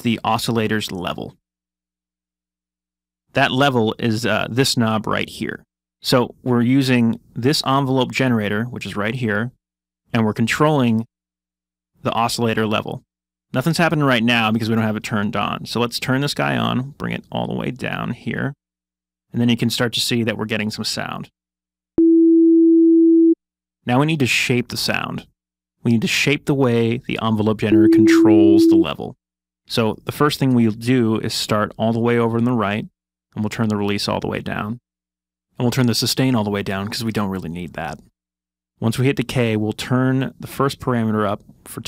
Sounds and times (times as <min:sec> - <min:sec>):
Speech: 0:00.0 - 0:01.4, 0:03.3 - 0:11.1, 0:12.0 - 0:18.6, 0:19.3 - 0:21.3, 0:23.8 - 0:34.8, 0:35.6 - 0:38.1, 0:38.8 - 0:41.8.